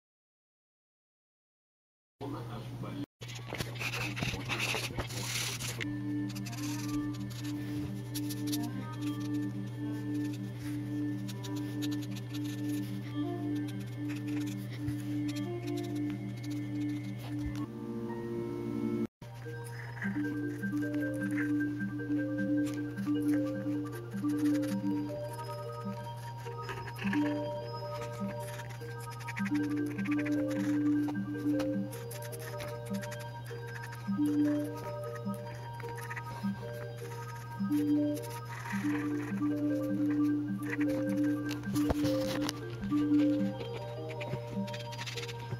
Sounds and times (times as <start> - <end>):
Speech: 2.2 - 5.7
Music: 3.3 - 45.5.